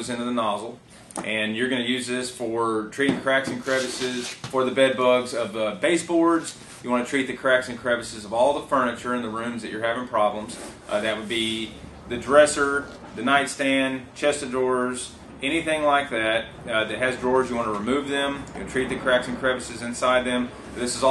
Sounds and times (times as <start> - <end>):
Speech: 0.0 - 21.1.